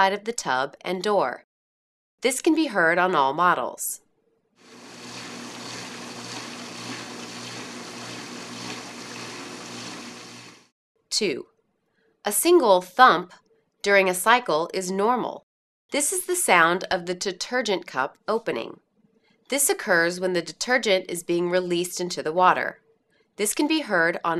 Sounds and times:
Speech: 0:00.0 - 0:01.5, 0:02.2 - 0:04.0, 0:11.1 - 0:11.5, 0:12.3 - 0:15.4, 0:16.0 - 0:18.8, 0:19.5 - 0:22.8, 0:23.4 - 0:24.3.

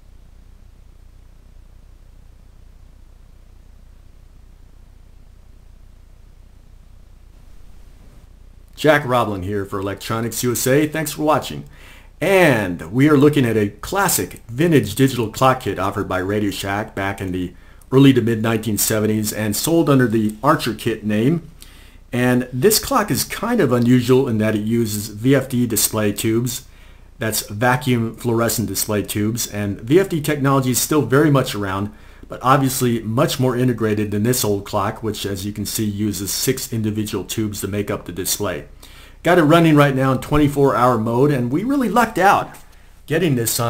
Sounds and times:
Speech: 0:08.8 - 0:21.5, 0:22.2 - 0:43.7.

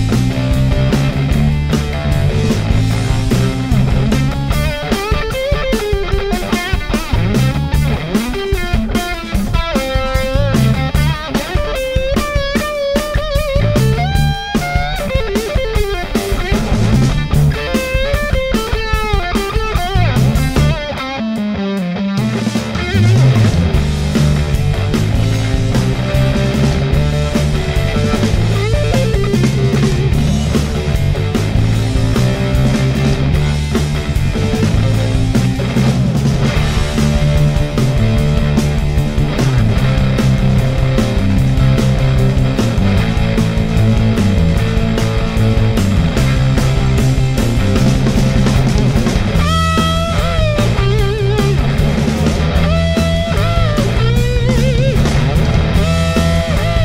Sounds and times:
Effects unit: 0:00.0 - 0:56.8
Electric guitar: 0:00.0 - 0:56.8.

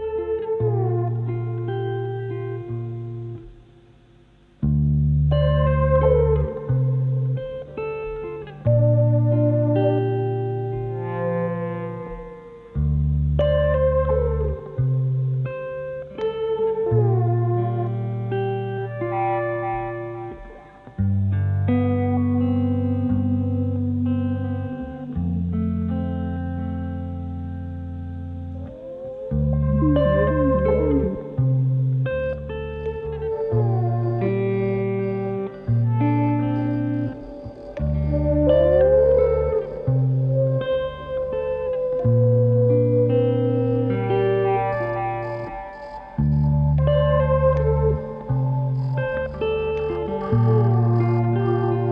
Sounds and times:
Music: 0:00.0 - 0:51.9.

